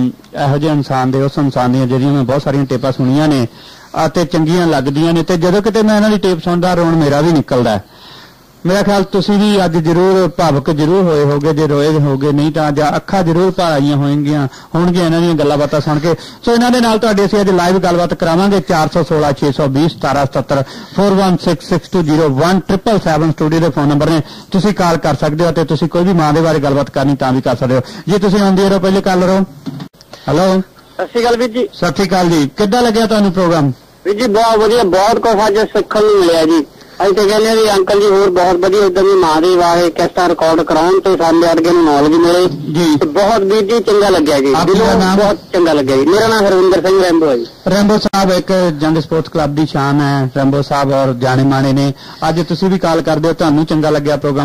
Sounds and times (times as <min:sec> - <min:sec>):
Speech: 0:00.0 - 0:07.9, 0:08.6 - 0:29.5, 0:30.3 - 0:54.4
Radio: 0:08.6 - 0:49.6, 0:50.2 - 0:54.4.